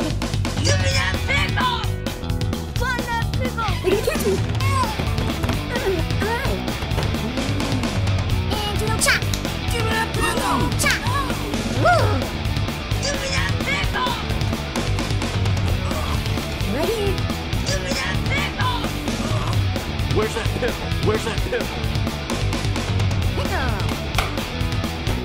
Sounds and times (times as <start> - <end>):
Music: 0.0 - 25.2.